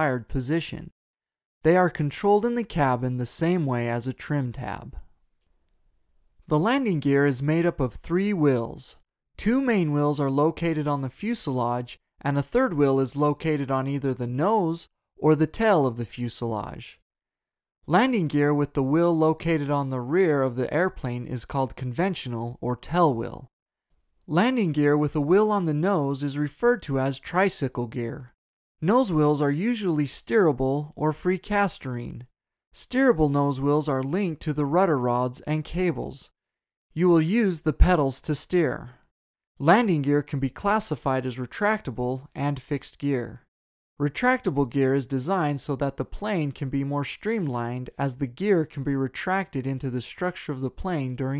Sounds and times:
Speech: 0:00.0 - 0:01.0, 0:01.6 - 0:05.1, 0:06.5 - 0:17.0, 0:17.9 - 0:23.5, 0:24.3 - 0:36.3, 0:37.0 - 0:39.0, 0:39.6 - 0:51.3.

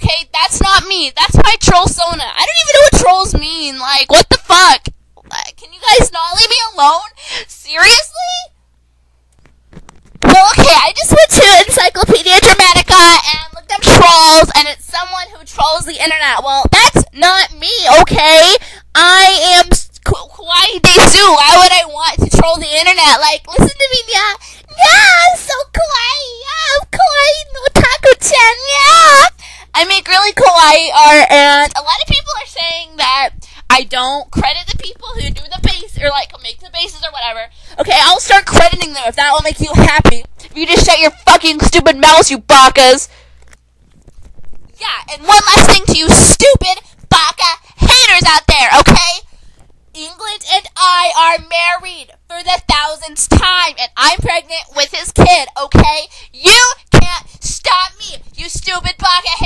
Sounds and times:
Speech: 0:00.0 - 0:08.5, 0:10.2 - 0:43.1, 0:44.8 - 0:49.2, 0:50.0 - 0:59.4.

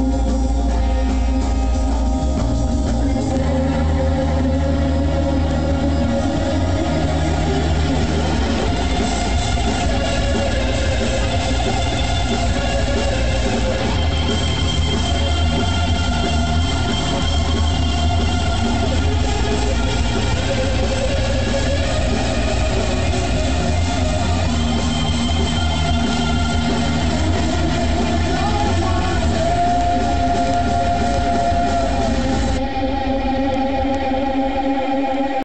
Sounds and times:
Electric guitar: 0:00.0 - 0:35.4.

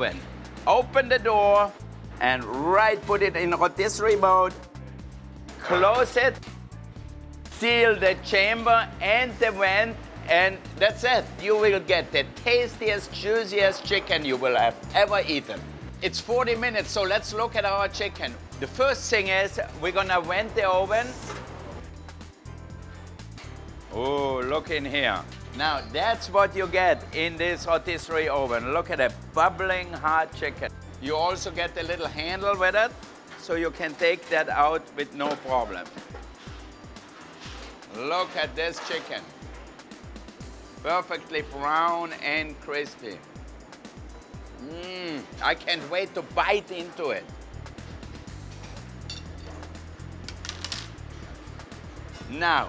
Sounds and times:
Speech: 0:00.0 - 0:04.6, 0:05.6 - 0:06.4, 0:07.6 - 0:21.3, 0:23.9 - 0:35.9, 0:37.9 - 0:39.3, 0:40.8 - 0:43.2, 0:44.6 - 0:47.3, 0:52.3 - 0:52.6
Music: 0:00.0 - 0:52.6.

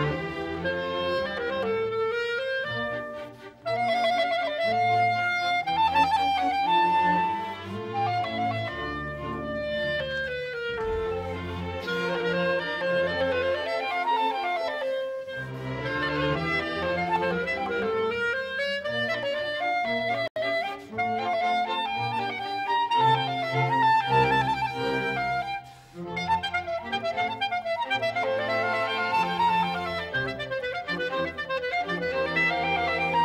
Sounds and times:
Violin, fiddle: 0:00.0 - 0:33.2
Wind instrument, woodwind instrument: 0:00.0 - 0:33.2.

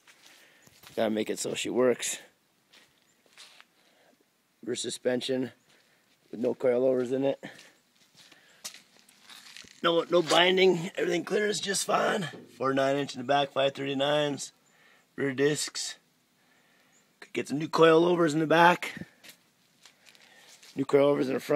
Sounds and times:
Outside, rural or natural: 0:00.0 - 0:21.5
Speech: 0:01.0 - 0:02.4, 0:04.6 - 0:05.6, 0:06.3 - 0:07.6, 0:09.8 - 0:14.6, 0:15.2 - 0:16.0, 0:17.2 - 0:19.1, 0:20.8 - 0:21.5.

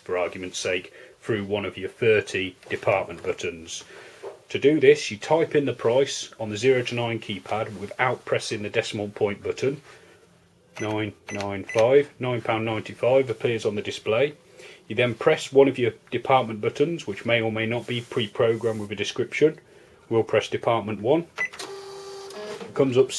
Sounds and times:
Speech: 0:00.0 - 0:03.9, 0:04.5 - 0:09.8, 0:10.8 - 0:21.4, 0:22.7 - 0:23.1
Cash register: 0:21.4 - 0:22.8.

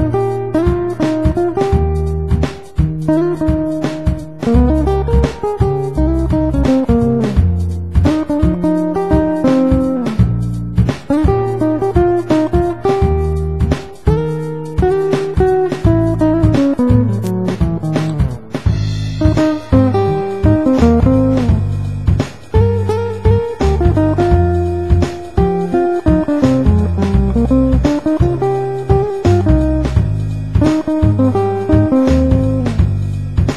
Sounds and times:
Strum: 0:00.0 - 0:33.5.

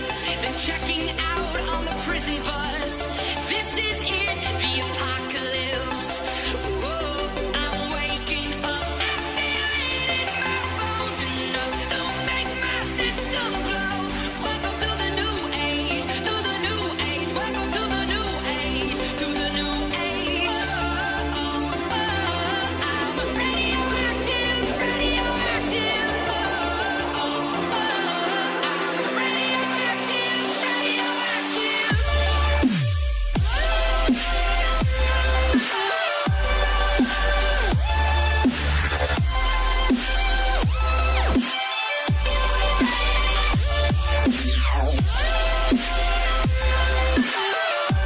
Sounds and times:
Music: 0:00.0 - 0:48.0.

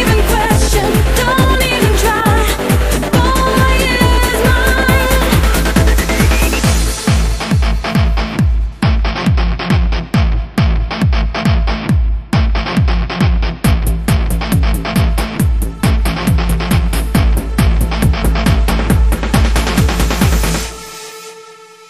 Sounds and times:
Trance music: 0:00.0 - 0:21.8.

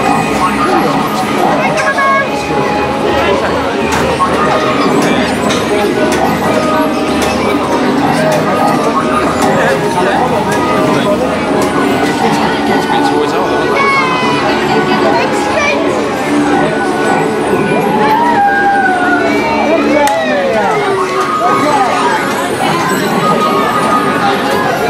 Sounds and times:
Speech: 0:00.0 - 0:18.4, 0:19.1 - 0:24.8
Music: 0:00.0 - 0:24.8.

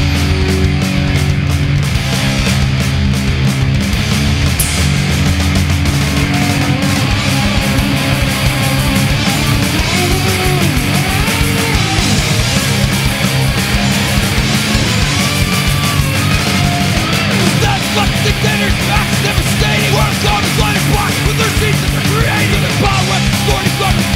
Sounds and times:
Punk rock: 0:00.0 - 0:24.1.

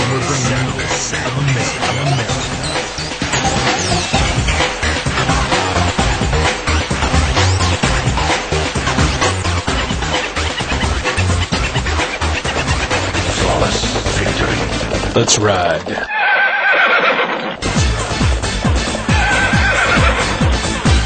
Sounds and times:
Music: 0:00.0 - 0:16.1, 0:17.6 - 0:21.0.

